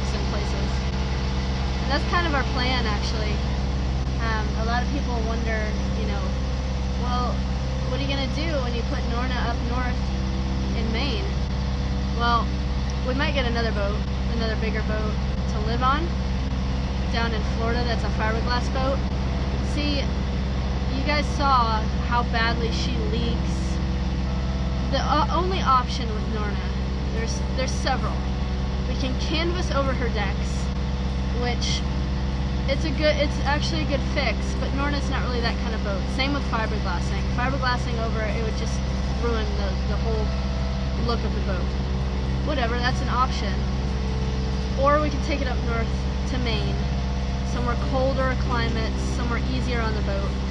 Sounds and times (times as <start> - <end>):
Speech: 0.0 - 0.9, 1.9 - 3.4, 4.2 - 6.4, 7.0 - 10.1, 10.8 - 11.4, 12.2 - 16.2, 17.1 - 19.1, 19.7 - 20.2, 20.9 - 23.8, 24.9 - 28.2, 28.9 - 30.7, 31.4 - 31.8, 32.7 - 40.4, 41.0 - 41.7, 42.4 - 43.6, 44.8 - 46.9, 47.5 - 50.4.